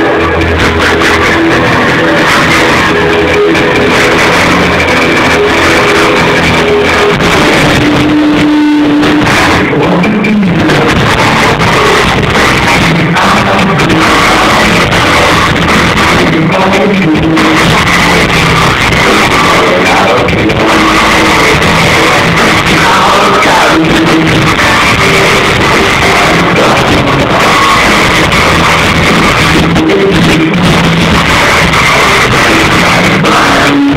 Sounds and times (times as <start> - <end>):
Cacophony: 0.0 - 33.9
Music: 0.0 - 33.9.